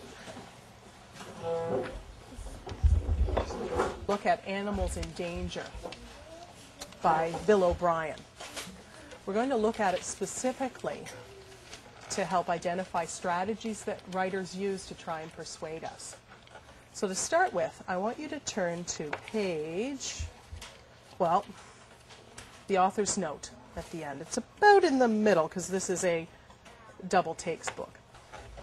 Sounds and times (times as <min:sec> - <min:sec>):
Speech: 0:04.1 - 0:05.8, 0:07.0 - 0:08.2, 0:22.7 - 0:26.3, 0:26.9 - 0:28.0.